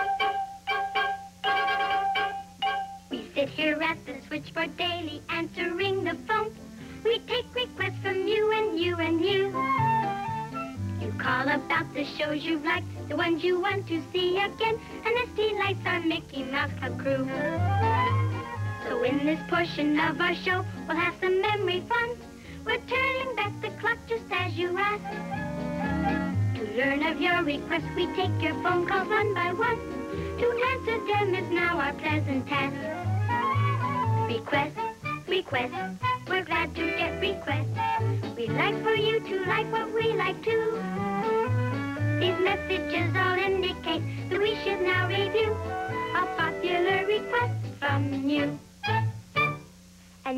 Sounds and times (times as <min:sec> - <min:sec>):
Music: 0:00.0 - 0:50.3.